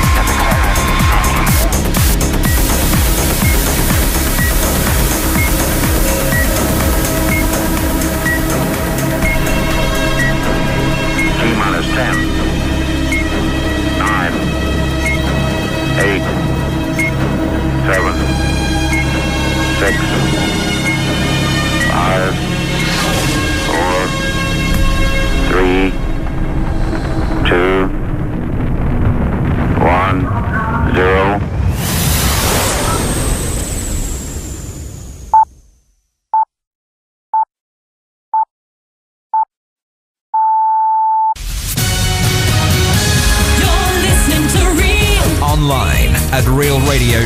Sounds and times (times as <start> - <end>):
Music: 0.0 - 28.4, 41.4 - 47.2
Dial tone: 40.4 - 41.4.